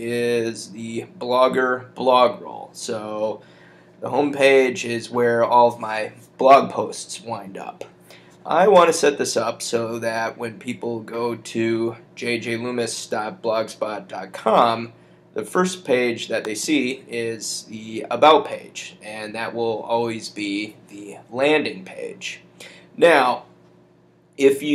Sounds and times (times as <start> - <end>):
Speech: 0.0 - 3.4, 4.0 - 23.5, 24.4 - 24.7.